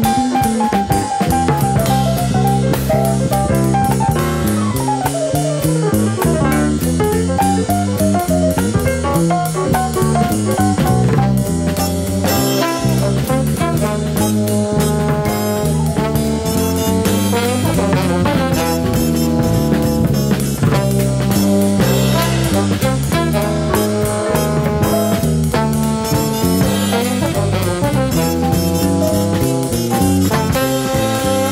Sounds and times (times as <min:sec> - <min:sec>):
Music: 0:00.0 - 0:31.5.